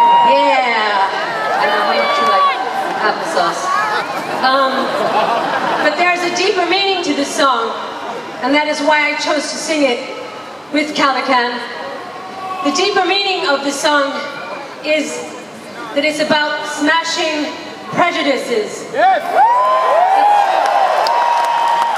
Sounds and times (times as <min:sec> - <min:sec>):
Female speech, woman speaking: 0:00.1 - 0:03.8, 0:04.4 - 0:05.0, 0:05.8 - 0:07.8, 0:08.4 - 0:11.7, 0:12.6 - 0:15.3, 0:15.9 - 0:18.9.